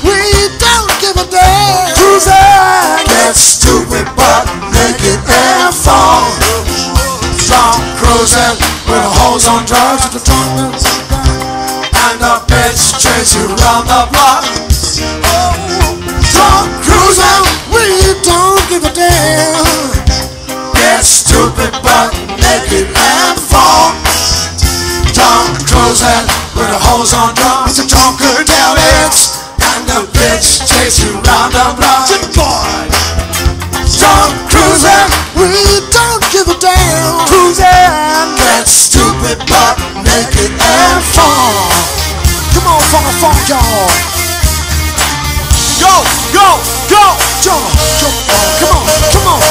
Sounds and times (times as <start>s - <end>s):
Music: 0.0s - 49.5s.